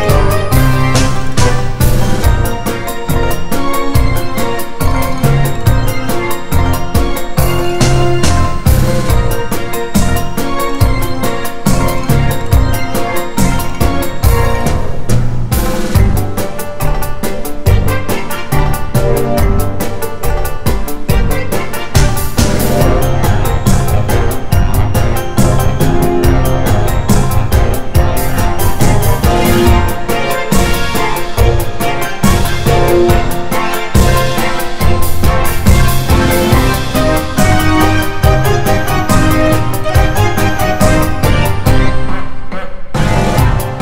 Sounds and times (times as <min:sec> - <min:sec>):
Music: 0:00.0 - 0:43.8.